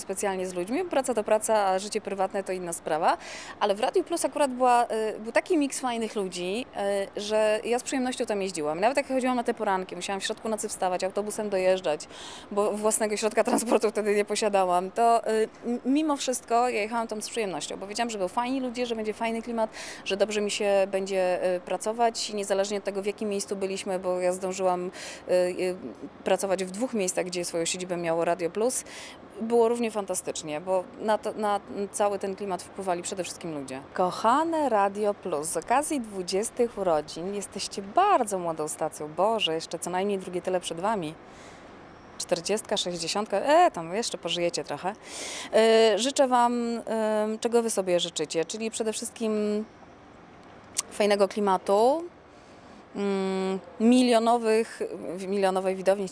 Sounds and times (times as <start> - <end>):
Speech: 0.0 - 28.8, 29.4 - 41.2, 42.2 - 49.6, 50.8 - 52.1, 53.0 - 56.1.